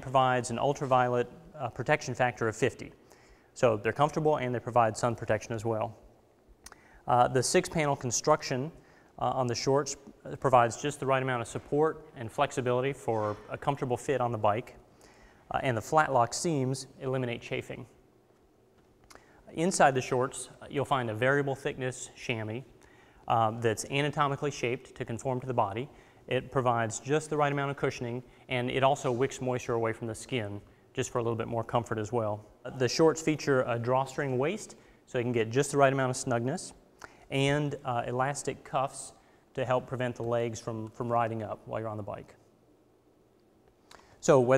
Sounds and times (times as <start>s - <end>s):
Speech: 0.0s - 3.0s, 3.6s - 6.0s, 7.1s - 14.8s, 15.5s - 18.0s, 19.5s - 22.7s, 23.3s - 42.4s, 44.2s - 44.5s.